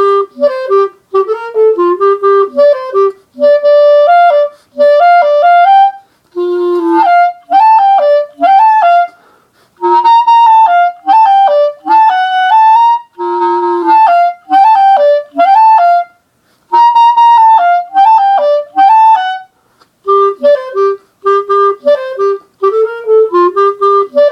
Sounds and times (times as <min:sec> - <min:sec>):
Clarinet: 0:00.0 - 0:24.3.